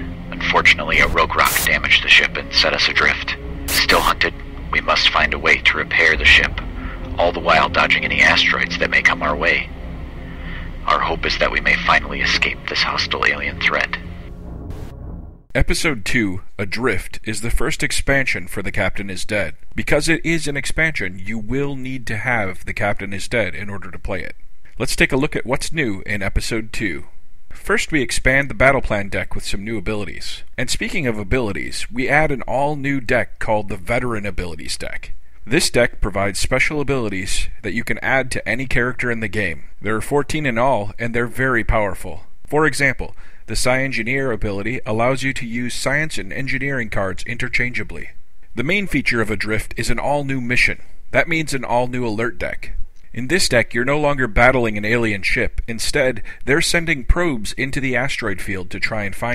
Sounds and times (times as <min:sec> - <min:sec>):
Speech: 0:00.3 - 0:09.7, 0:10.8 - 0:14.0, 0:15.5 - 0:59.3.